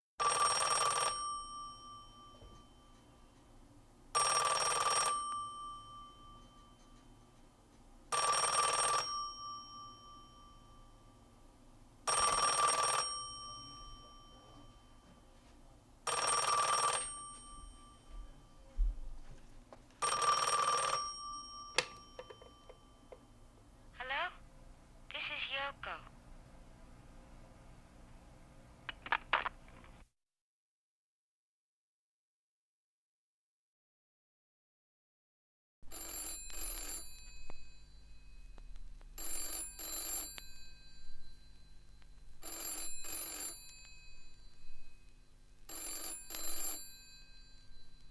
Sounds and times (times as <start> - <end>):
Telephone: 0.2 - 1.4, 4.2 - 5.4, 8.1 - 9.2, 12.1 - 13.4, 16.1 - 17.8, 20.0 - 22.8, 35.9 - 37.8, 39.2 - 40.8, 42.4 - 44.0, 45.7 - 47.7.